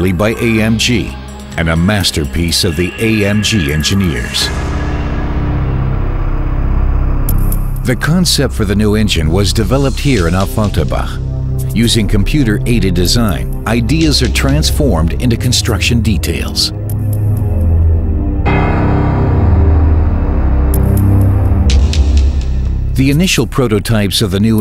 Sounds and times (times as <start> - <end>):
Speech: 0.0 - 4.6, 7.8 - 16.8, 23.0 - 24.6
Music: 0.0 - 24.6.